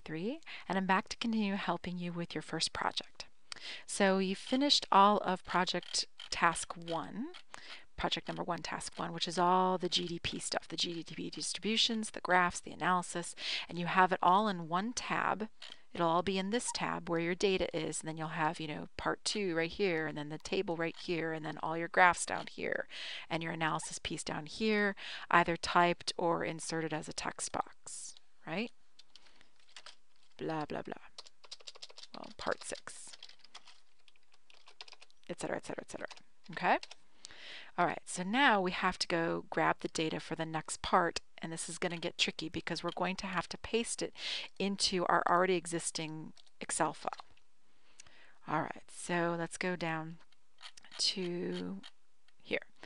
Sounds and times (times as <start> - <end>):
Computer keyboard: 29.0 - 35.2, 35.9 - 37.0.